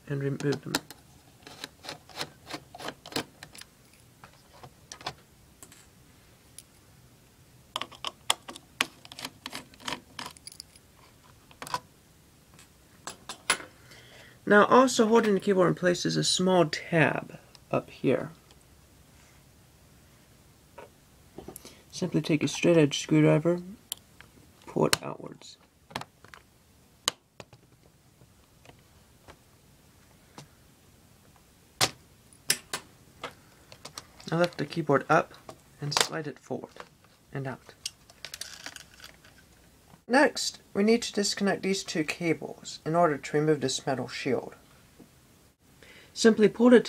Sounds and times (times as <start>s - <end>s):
Speech: 0.0s - 0.8s, 14.4s - 18.4s, 21.9s - 23.8s, 24.7s - 25.6s, 34.2s - 37.8s, 40.1s - 44.6s, 46.2s - 46.8s.